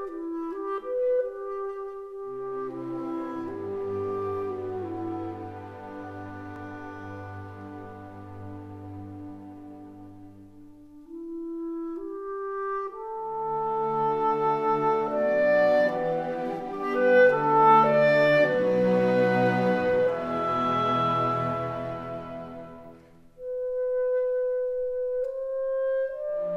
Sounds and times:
Flute: 0.0s - 26.5s.

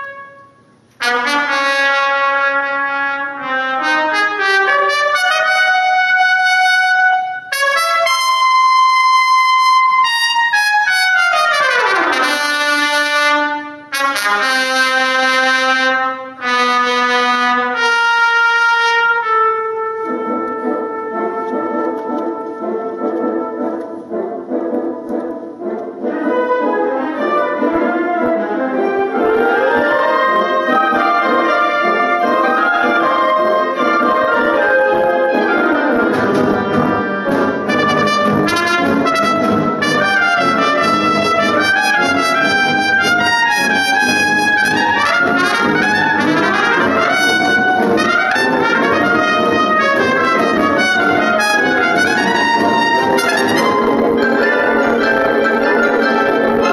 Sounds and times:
Music: 0.0s - 56.7s.

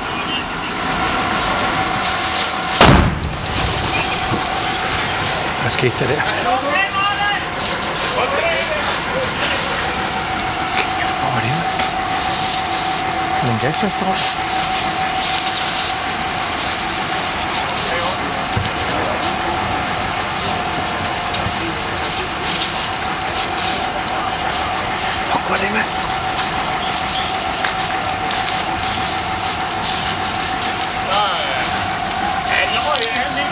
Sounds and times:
Fire: 0.0s - 33.5s.

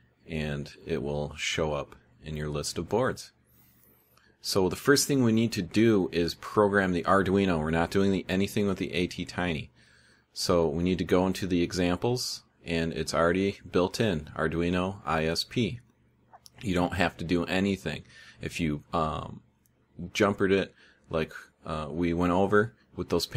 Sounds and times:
Inside, small room: 0.0s - 23.3s
Speech: 0.2s - 3.4s, 4.4s - 23.3s.

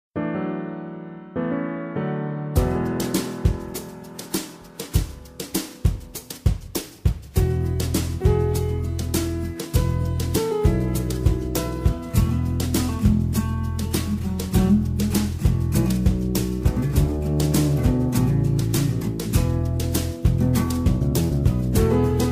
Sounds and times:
Electric piano: 0.2s - 22.3s.

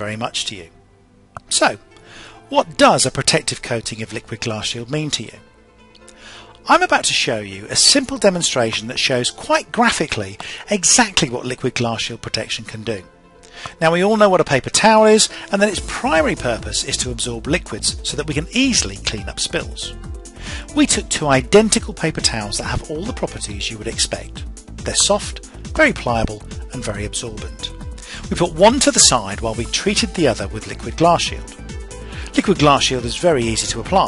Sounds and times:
Speech: 0.0s - 0.8s, 1.4s - 1.8s, 2.5s - 5.4s, 6.6s - 13.1s, 13.8s - 20.0s, 20.7s - 31.5s, 32.3s - 34.0s
Music: 0.0s - 34.0s.

